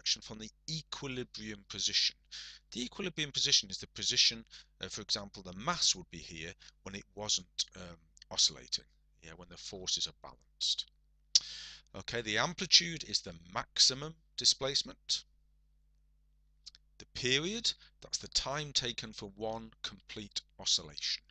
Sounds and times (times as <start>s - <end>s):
Speech: 0.0s - 10.9s, 11.9s - 15.3s, 16.7s - 21.3s.